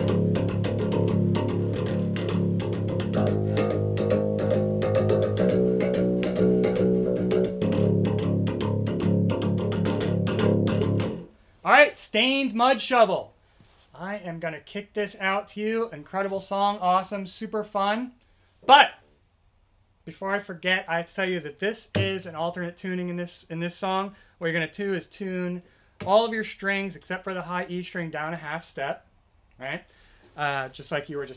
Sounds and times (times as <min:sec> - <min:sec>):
Speech: 0:11.7 - 0:13.3, 0:13.9 - 0:19.0, 0:20.1 - 0:29.0, 0:29.6 - 0:31.3.